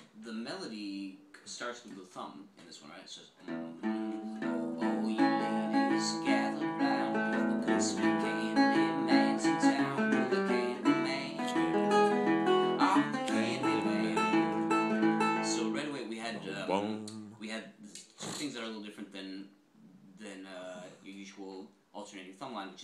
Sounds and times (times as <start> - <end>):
Speech: 0.2 - 4.2, 15.5 - 22.8
Acoustic guitar: 3.4 - 17.4
Strum: 3.5 - 17.5.